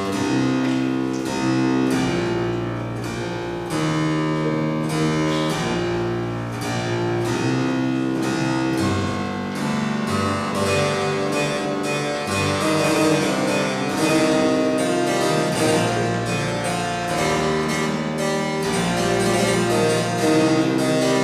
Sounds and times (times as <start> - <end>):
Harpsichord: 0.0 - 21.2.